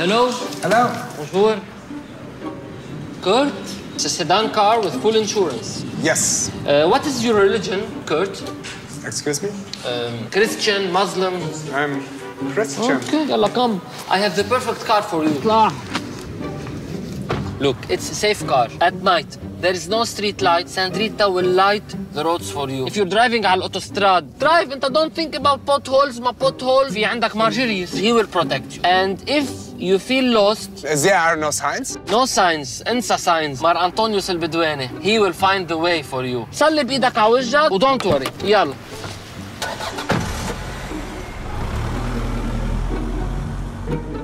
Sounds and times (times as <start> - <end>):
Music: 0.0 - 44.2.